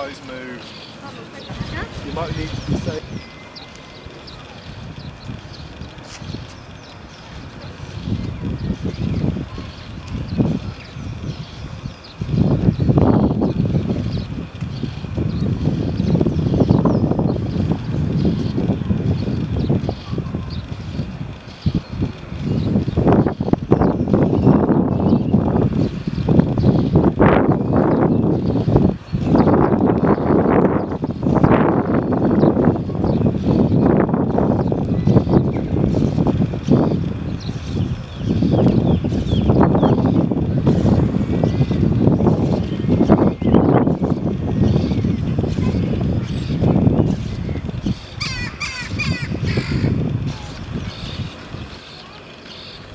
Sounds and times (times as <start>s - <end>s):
Boat, Water vehicle: 0.0s - 52.9s.